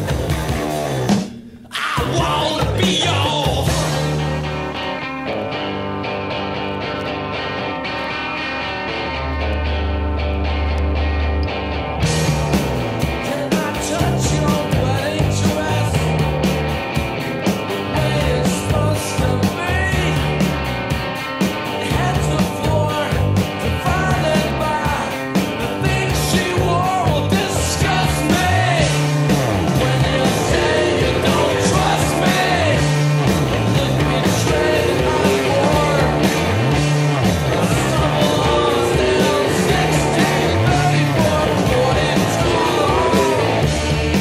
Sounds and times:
Music: 0:00.0 - 0:44.2.

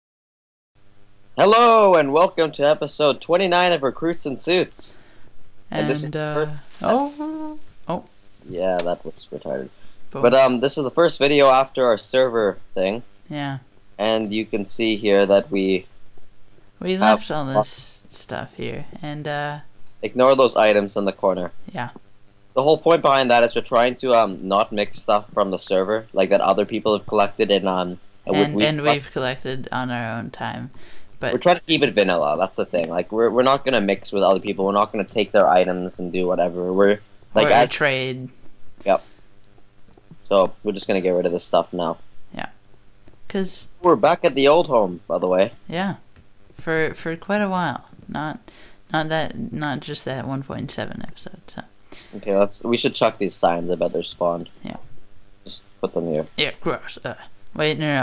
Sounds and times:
Speech: 0:05.7 - 0:15.8, 0:16.8 - 0:18.8, 0:22.6 - 0:38.3, 0:52.2 - 0:54.8, 0:55.5 - 0:58.0.

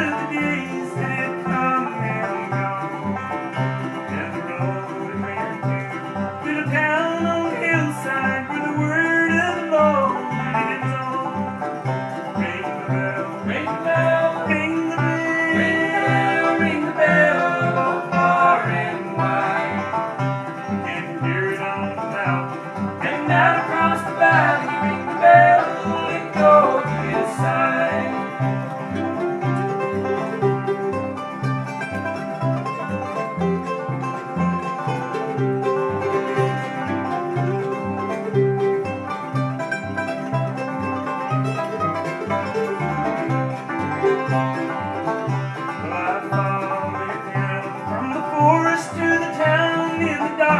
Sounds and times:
Music: 0:00.0 - 0:50.5.

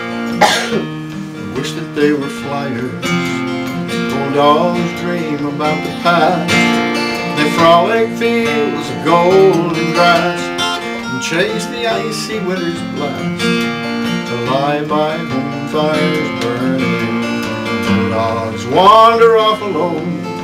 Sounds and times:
Country: 0:00.0 - 0:20.4
Guitar: 0:00.0 - 0:20.4.

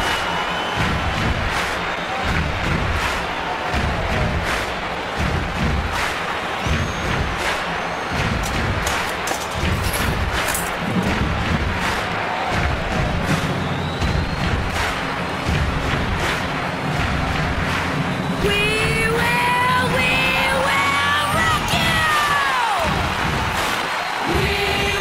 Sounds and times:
Music: 0:00.0 - 0:25.0.

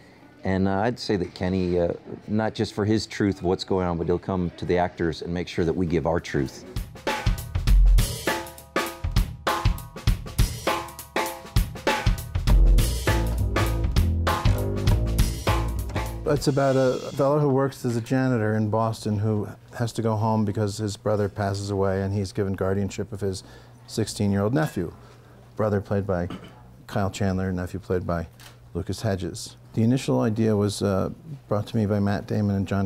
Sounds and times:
Drum kit: 0:06.7 - 0:17.3
Bass drum: 0:06.8 - 0:10.9, 0:11.6 - 0:16.6.

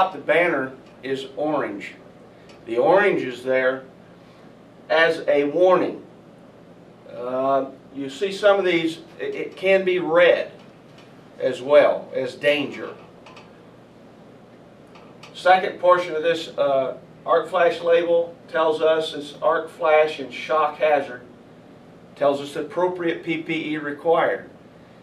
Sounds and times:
Speech: 0:00.0 - 0:02.0, 0:02.6 - 0:03.9, 0:04.9 - 0:06.1, 0:07.1 - 0:10.6, 0:11.4 - 0:13.0, 0:15.3 - 0:21.3, 0:22.2 - 0:24.5.

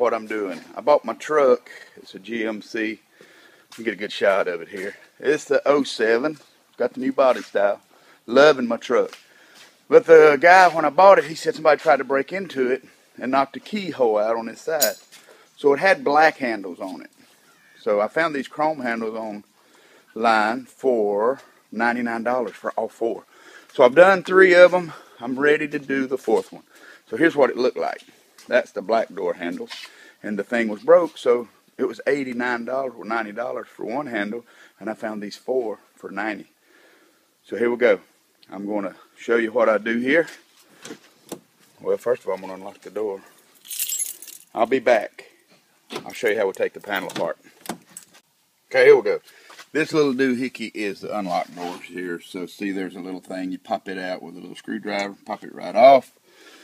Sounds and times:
Speech: 0:00.0 - 0:03.0, 0:03.8 - 0:09.2, 0:09.9 - 0:15.0, 0:15.6 - 0:17.2, 0:17.8 - 0:19.5, 0:20.2 - 0:36.5, 0:37.4 - 0:40.4, 0:41.8 - 0:43.3, 0:44.5 - 0:45.3, 0:45.9 - 0:47.4, 0:48.7 - 0:56.1.

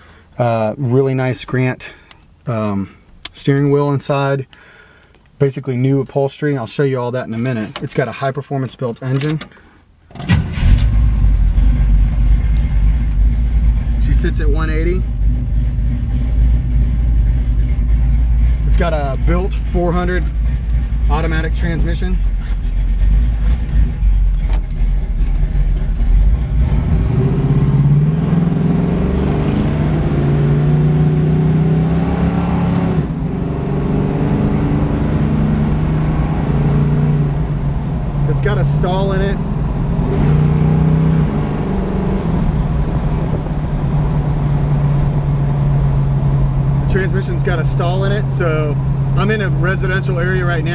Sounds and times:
Car: 0:09.1 - 0:50.7.

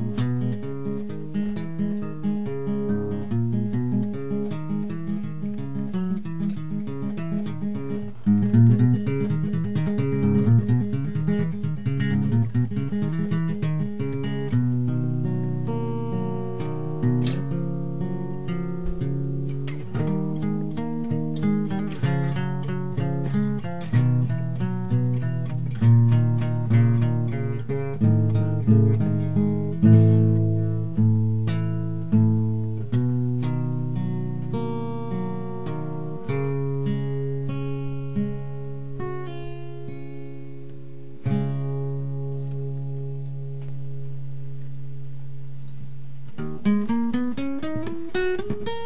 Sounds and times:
Acoustic guitar: 0:00.0 - 0:48.8.

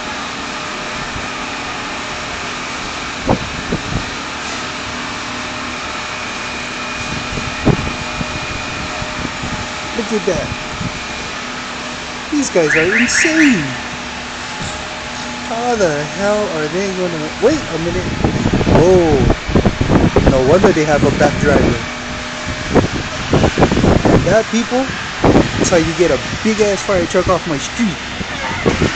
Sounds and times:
Speech: 0:09.9 - 0:10.6, 0:12.3 - 0:13.8, 0:15.5 - 0:19.4, 0:20.3 - 0:21.9, 0:24.2 - 0:25.0, 0:25.6 - 0:28.7
Reversing beeps: 0:12.6 - 0:13.8.

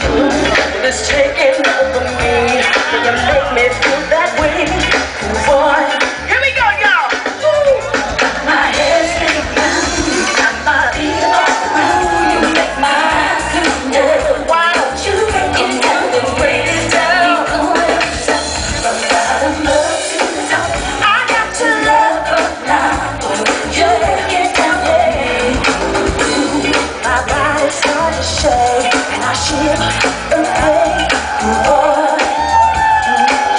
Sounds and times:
Female singing: 0:00.0 - 0:06.3, 0:07.6 - 0:33.5
Music: 0:00.0 - 0:33.5.

